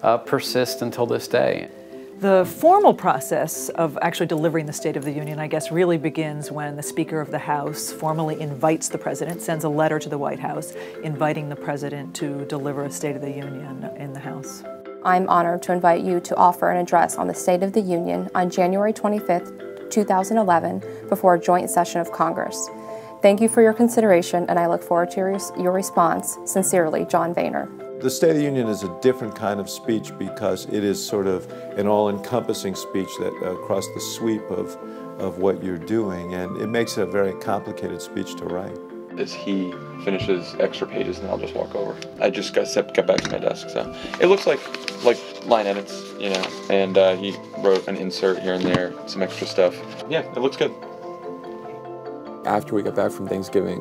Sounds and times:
Music: 0.0 - 53.8.

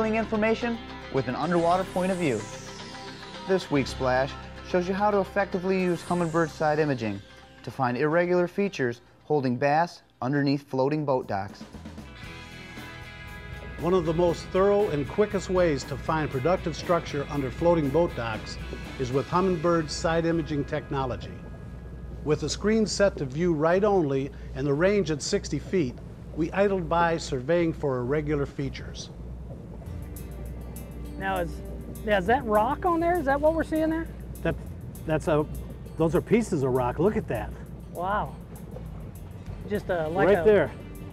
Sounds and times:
Music: 0.0 - 9.0, 11.2 - 25.7, 29.4 - 41.1.

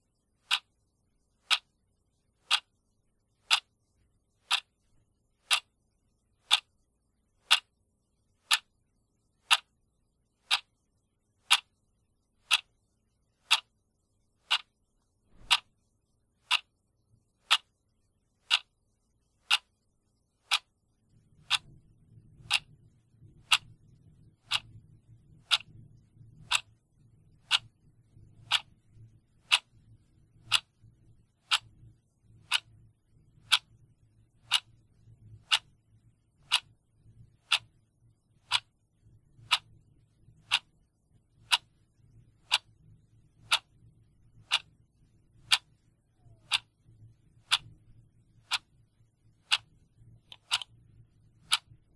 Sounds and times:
Tick-tock: 0.4 - 0.8, 1.4 - 1.7, 2.4 - 2.8, 3.4 - 4.8, 5.4 - 5.8, 6.4 - 6.8, 7.4 - 7.8, 8.4 - 8.7, 9.4 - 9.7, 10.4 - 10.8, 11.4 - 11.8, 12.4 - 12.8, 13.4 - 13.7, 14.4 - 15.8, 16.4 - 16.8, 17.4 - 17.8, 18.4 - 18.8, 19.4 - 19.8, 20.4 - 26.8, 27.4 - 32.8, 33.4 - 36.8, 37.4 - 51.9.

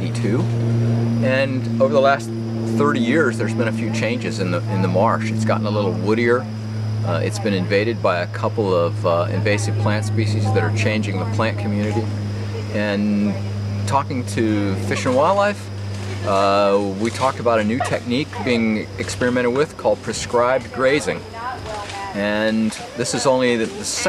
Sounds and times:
Speech: 0.0 - 0.5, 1.2 - 24.0.

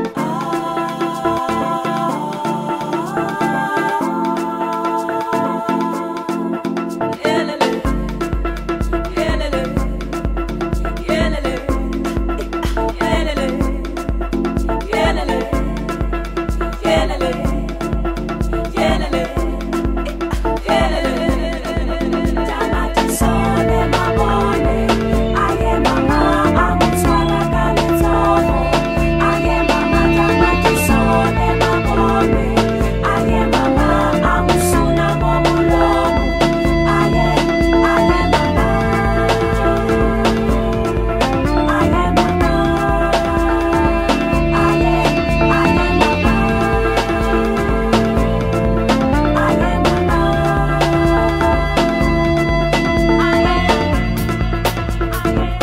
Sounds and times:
Music: 0.0 - 55.6.

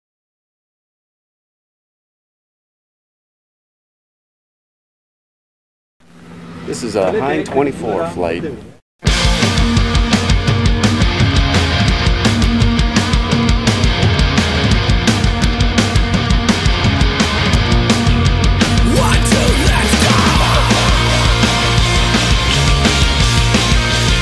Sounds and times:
Speech: 6.7 - 8.8, 18.9 - 20.2
Music: 9.0 - 24.2.

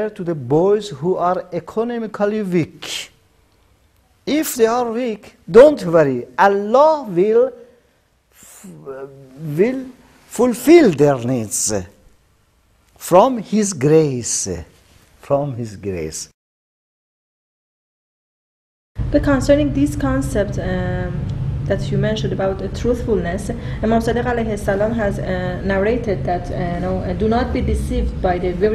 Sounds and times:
Speech: 4.3 - 7.6, 8.5 - 12.0, 13.0 - 16.4.

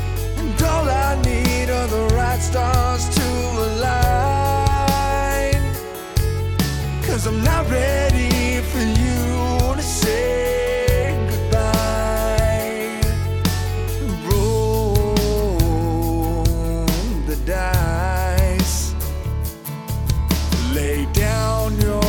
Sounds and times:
Tender music: 0.0 - 22.0.

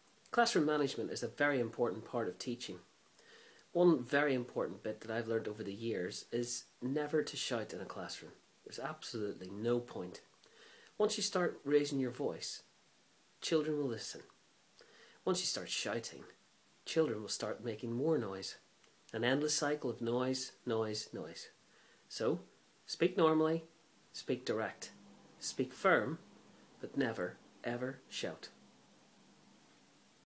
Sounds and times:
Speech: 0.3 - 2.9, 3.7 - 10.3, 11.0 - 12.7, 13.4 - 14.4, 15.2 - 26.2, 26.8 - 28.6.

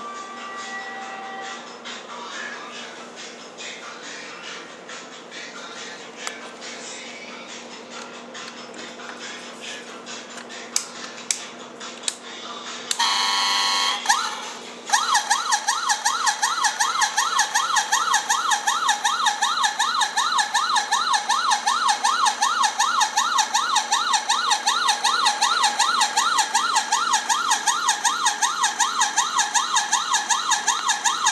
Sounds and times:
Car alarm: 13.0 - 31.3.

